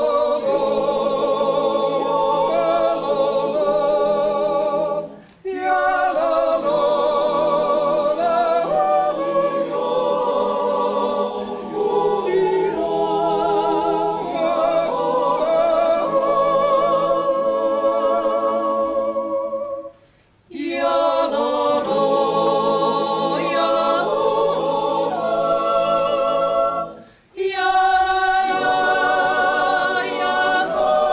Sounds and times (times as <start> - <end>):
Choir: 0.0 - 31.1.